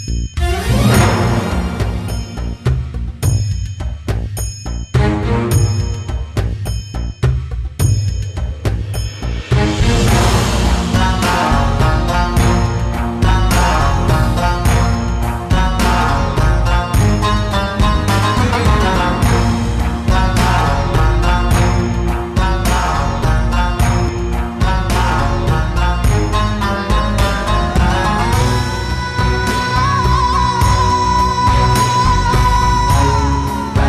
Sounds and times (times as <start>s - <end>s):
Folk music: 0.4s - 2.9s, 5.0s - 6.4s, 9.5s - 33.8s.